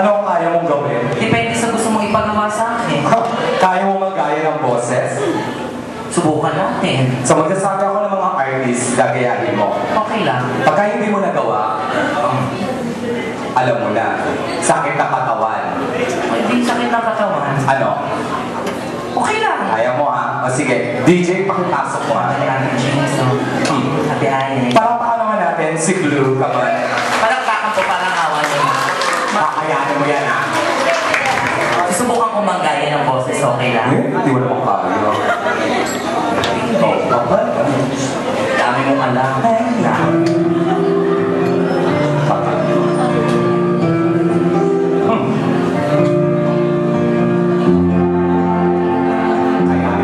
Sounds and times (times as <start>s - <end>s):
Speech: 19.2s - 35.4s.